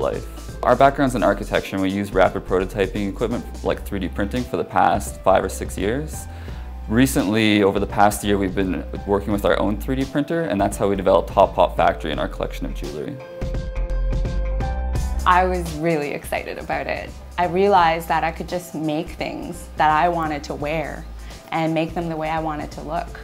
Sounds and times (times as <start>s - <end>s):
Speech: 0.0s - 6.3s, 6.9s - 13.2s, 15.3s - 23.2s
Music: 0.0s - 23.2s.